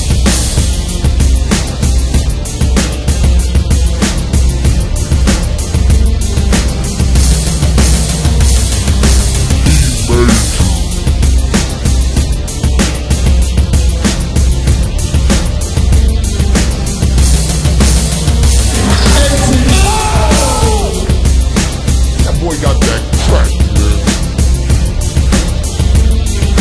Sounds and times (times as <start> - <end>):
Angry music: 0.0 - 26.6.